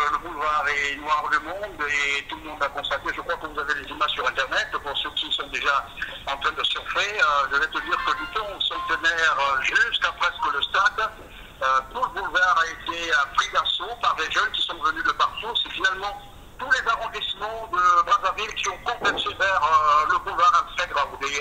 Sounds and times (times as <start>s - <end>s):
Speech: 0.0s - 21.4s.